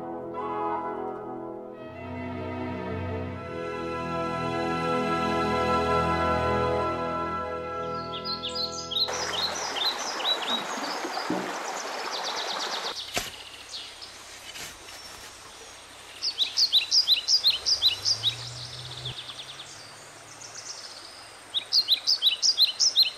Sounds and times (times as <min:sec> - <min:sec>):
Music: 0:00.0 - 0:09.1.